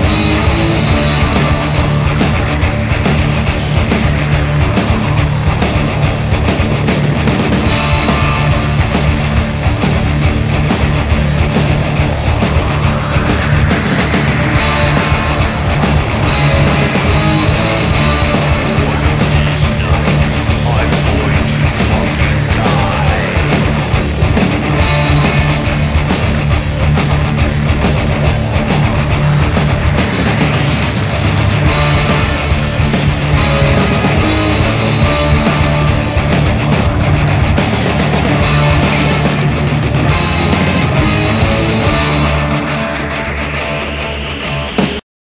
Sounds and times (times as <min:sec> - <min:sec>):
Heavy metal: 0:00.0 - 0:45.0.